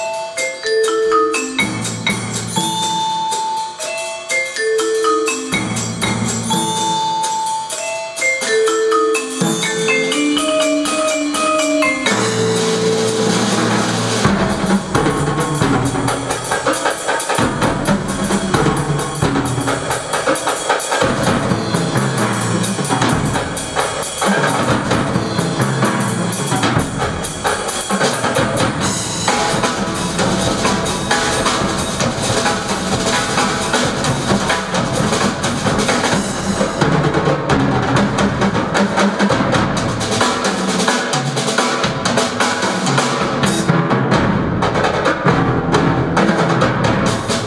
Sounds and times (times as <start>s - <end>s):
Music: 0.0s - 47.4s.